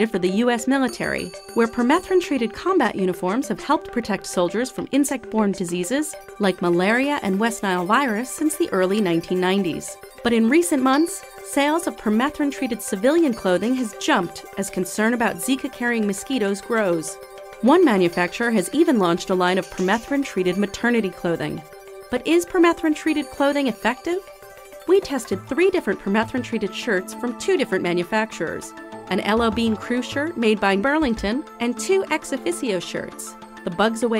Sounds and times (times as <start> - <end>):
Speech: 0.0 - 21.6, 22.2 - 24.2, 24.9 - 34.1
Music: 0.0 - 34.1.